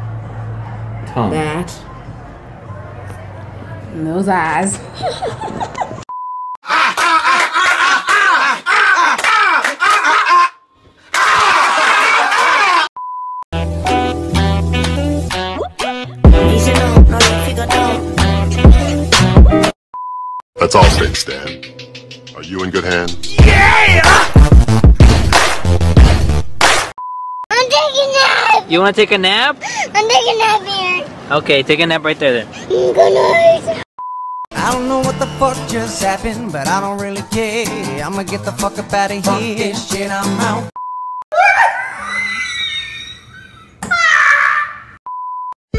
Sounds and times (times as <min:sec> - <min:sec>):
Music: 0:13.6 - 0:19.8, 0:20.6 - 0:26.5, 0:34.6 - 0:40.7.